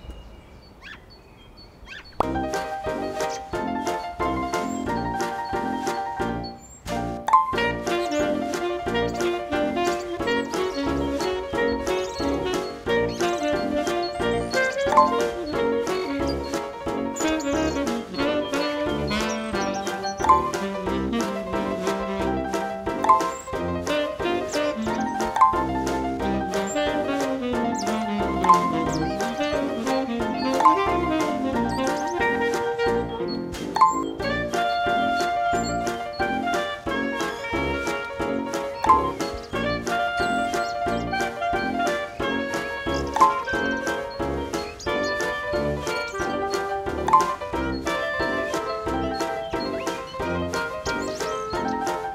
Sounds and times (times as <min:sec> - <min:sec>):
Music: 0:02.2 - 0:52.1.